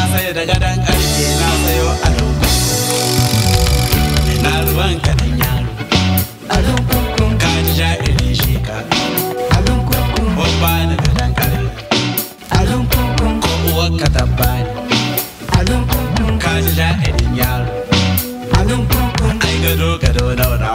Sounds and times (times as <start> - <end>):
Music: 0.0 - 20.7.